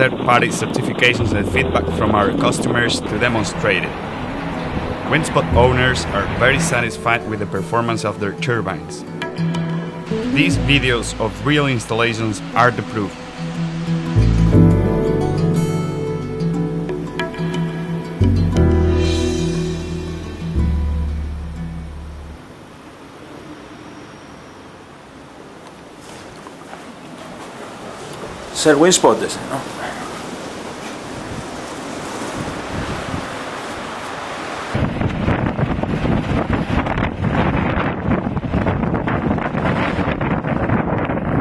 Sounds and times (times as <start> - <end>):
Speech: 0.0 - 3.9, 5.1 - 9.1, 10.4 - 13.1, 28.5 - 30.1
Music: 1.1 - 22.4.